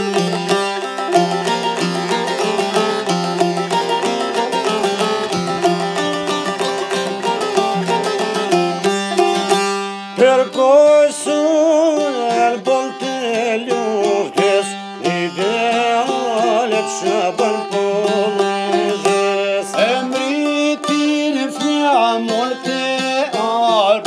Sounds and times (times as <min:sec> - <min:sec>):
Plucked string instrument: 0:00.0 - 0:24.0.